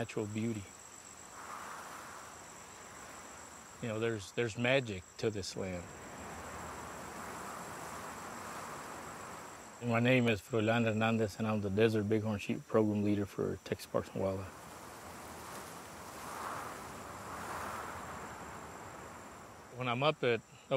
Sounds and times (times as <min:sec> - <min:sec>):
Speech: 0:00.0 - 0:00.7, 0:03.8 - 0:05.9, 0:09.8 - 0:14.5, 0:19.8 - 0:20.7.